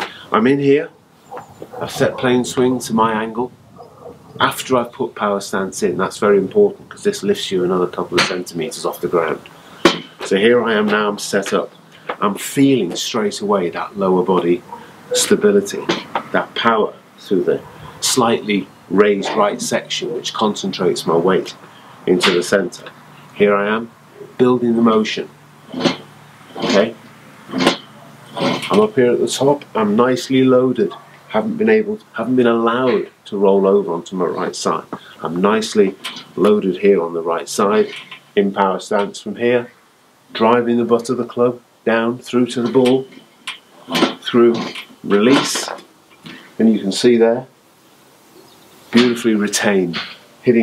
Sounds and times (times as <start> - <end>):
Speech: 0.0 - 0.9, 1.8 - 3.5, 4.4 - 9.5, 10.2 - 26.0, 26.6 - 27.7, 28.4 - 43.2, 43.9 - 47.5, 49.0 - 50.6.